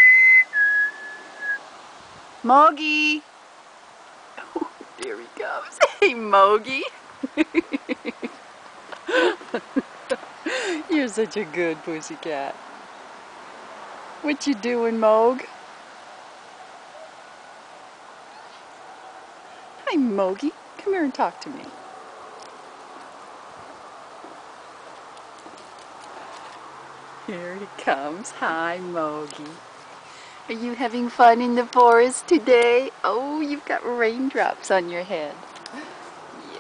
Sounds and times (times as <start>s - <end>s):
Speech: 2.4s - 3.3s, 4.4s - 7.0s, 10.8s - 12.6s, 14.2s - 15.5s, 19.8s - 21.8s, 27.3s - 29.6s, 30.5s - 35.4s.